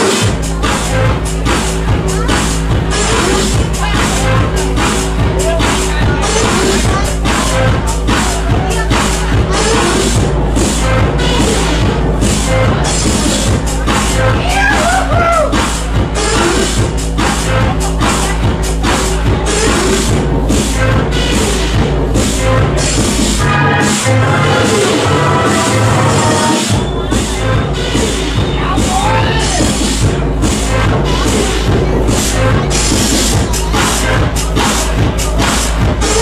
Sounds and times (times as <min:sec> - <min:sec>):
Electronic music: 0:00.0 - 0:36.2.